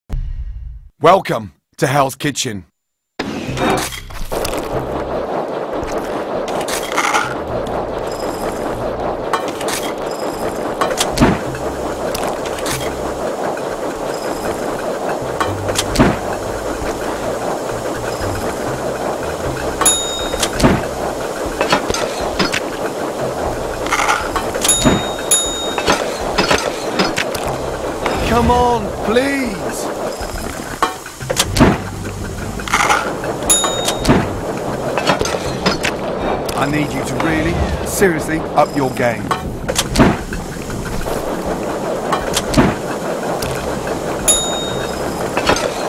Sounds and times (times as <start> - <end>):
Speech: 1.0 - 2.7, 28.2 - 29.9, 36.6 - 39.3.